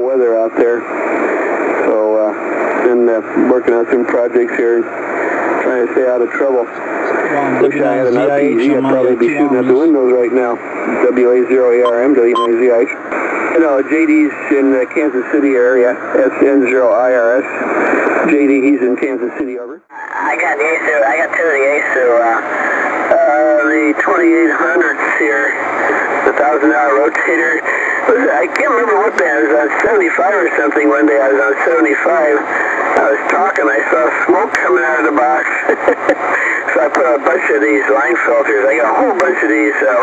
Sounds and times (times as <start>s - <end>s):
Speech: 0.0s - 0.8s, 1.8s - 4.9s, 5.6s - 17.5s, 18.2s - 22.4s, 23.1s - 25.6s, 26.2s - 35.9s, 36.7s - 40.0s
Radio: 0.0s - 40.0s.